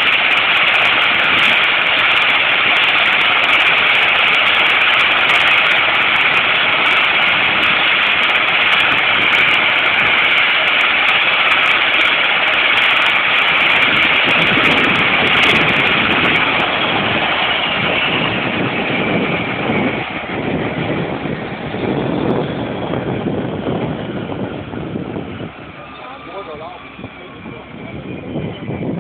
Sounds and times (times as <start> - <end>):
Fixed-wing aircraft, airplane: 0.0 - 29.0
Speech: 25.7 - 28.8.